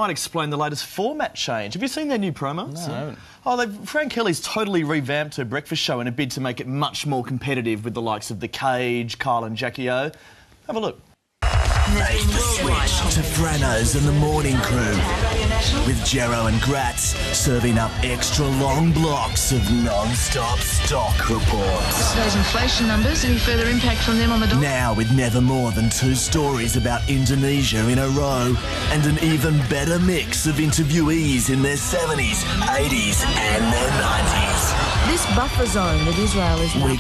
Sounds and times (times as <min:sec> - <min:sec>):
Speech: 0:00.0 - 0:11.0, 0:11.9 - 0:37.0
Music: 0:11.4 - 0:37.0.